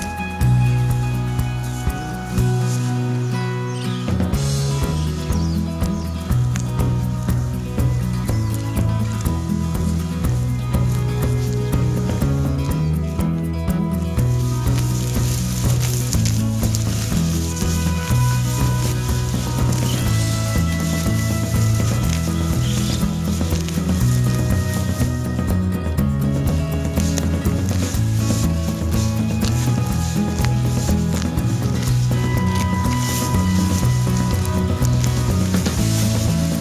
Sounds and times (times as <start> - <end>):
Music: 0.0 - 36.6.